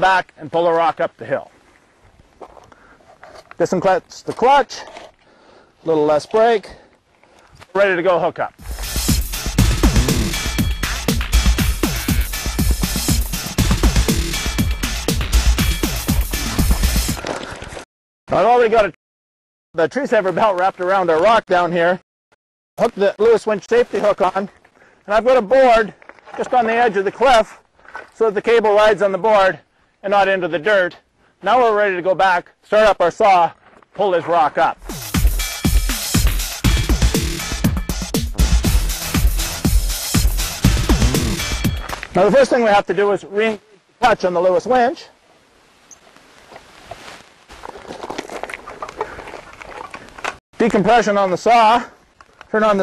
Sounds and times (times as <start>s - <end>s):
Speech: 0.0s - 1.5s, 3.6s - 4.9s, 5.8s - 6.8s, 7.7s - 8.6s, 18.3s - 19.0s, 19.8s - 22.0s, 22.8s - 24.5s, 25.1s - 27.6s, 28.2s - 34.8s, 42.2s - 45.2s, 50.6s - 51.9s, 52.5s - 52.8s
Electronica: 8.6s - 17.2s, 34.8s - 42.2s.